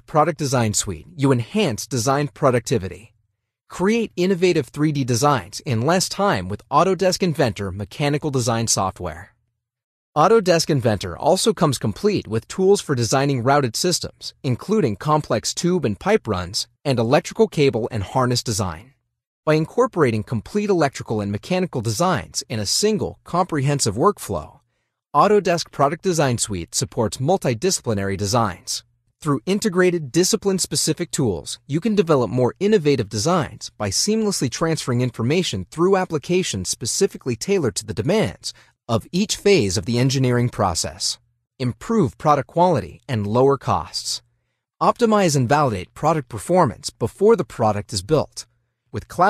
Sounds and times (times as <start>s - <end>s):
Speech synthesizer: 3.7s - 9.3s, 25.2s - 44.2s.